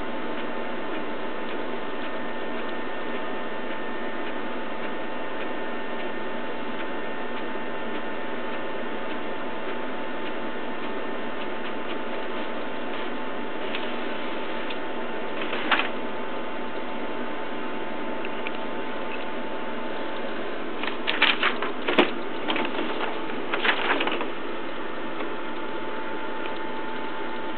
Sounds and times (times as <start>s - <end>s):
Printer: 0.0s - 27.5s.